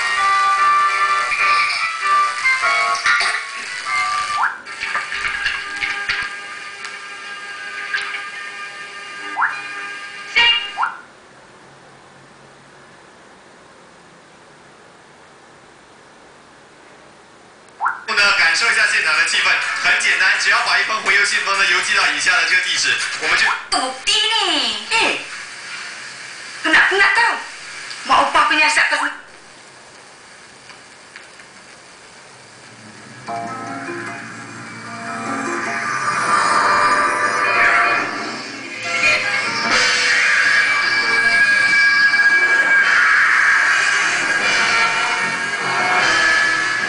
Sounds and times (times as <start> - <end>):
Speech: 18.1 - 25.3, 26.6 - 29.3.